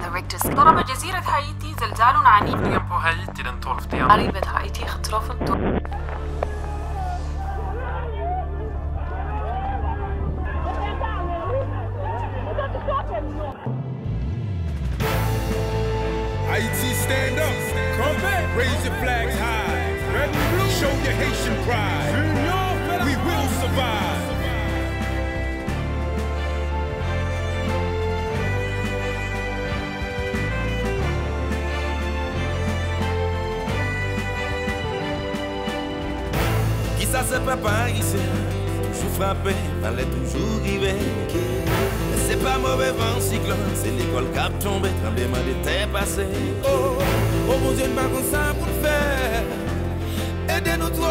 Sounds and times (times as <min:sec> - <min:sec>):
Speech: 0:00.0 - 0:05.7, 0:16.5 - 0:24.3
Music: 0:00.0 - 0:51.1.